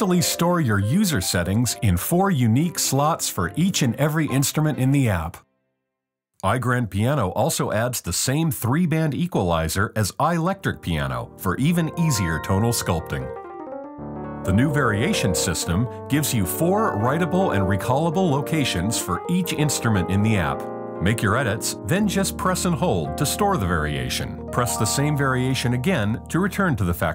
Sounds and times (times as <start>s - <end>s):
Speech: 0.0s - 5.4s, 6.4s - 13.4s, 14.5s - 27.1s
Music: 0.0s - 6.0s, 10.2s - 27.1s.